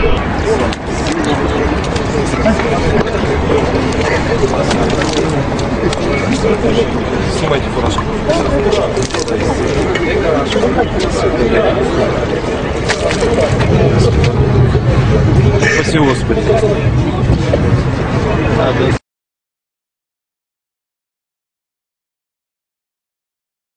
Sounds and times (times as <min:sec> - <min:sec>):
Speech: 0:00.0 - 0:19.0.